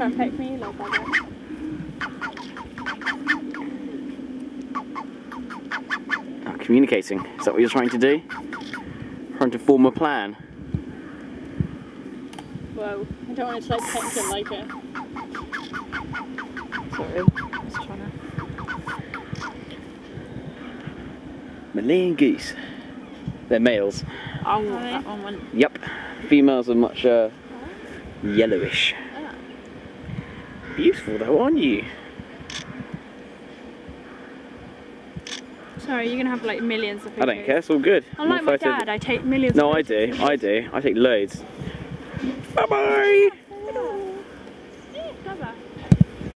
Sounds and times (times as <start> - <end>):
Goose: 0.7 - 1.3, 2.0 - 3.7, 4.7 - 6.3, 7.1 - 8.9, 14.2 - 19.6.